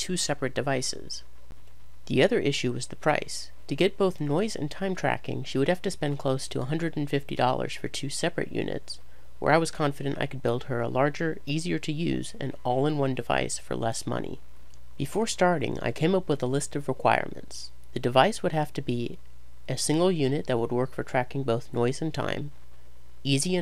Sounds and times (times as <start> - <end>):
Speech: 0.0 - 1.3, 2.1 - 14.4, 15.0 - 22.5, 23.2 - 23.6.